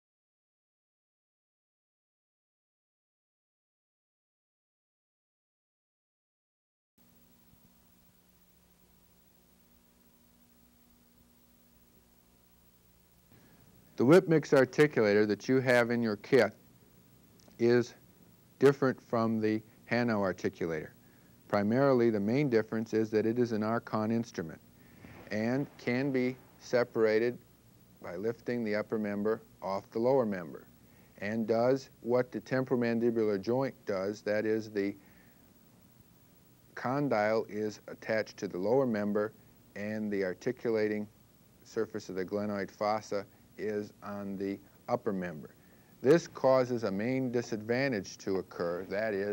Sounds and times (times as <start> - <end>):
Speech: 14.0 - 16.6, 17.5 - 18.0, 18.6 - 24.6, 25.3 - 27.4, 28.0 - 35.0, 36.8 - 49.3.